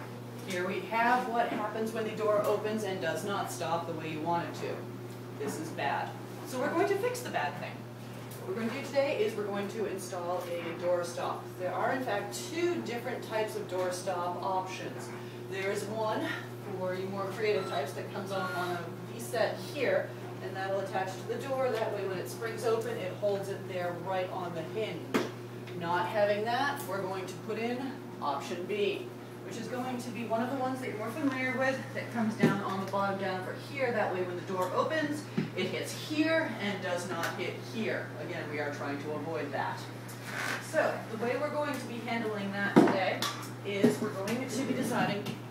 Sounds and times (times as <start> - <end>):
Speech: 0.5 - 7.8, 8.4 - 40.0, 40.6 - 45.4.